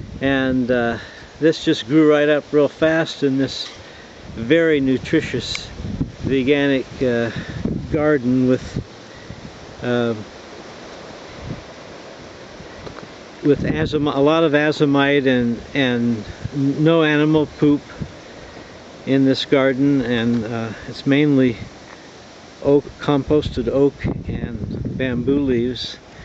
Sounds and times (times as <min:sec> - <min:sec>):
Outside, rural or natural: 0:00.0 - 0:26.2
Speech: 0:00.2 - 0:03.7, 0:04.4 - 0:05.7, 0:06.3 - 0:08.8, 0:09.8 - 0:10.3, 0:13.4 - 0:18.0, 0:19.1 - 0:21.7, 0:22.6 - 0:26.0.